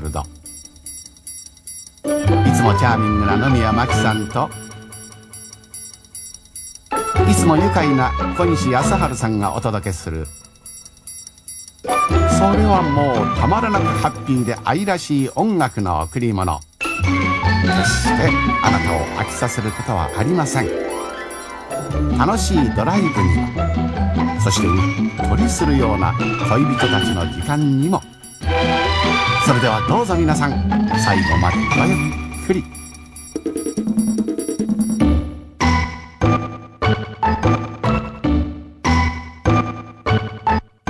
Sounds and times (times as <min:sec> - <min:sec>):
Speech: 0:00.0 - 0:00.3, 0:02.4 - 0:04.6, 0:07.2 - 0:10.3, 0:12.3 - 0:16.6, 0:17.7 - 0:20.7, 0:22.1 - 0:23.5, 0:24.4 - 0:28.1, 0:29.4 - 0:32.7
Musical instrument: 0:00.2 - 0:08.0, 0:08.9 - 0:16.2, 0:16.8 - 0:35.4.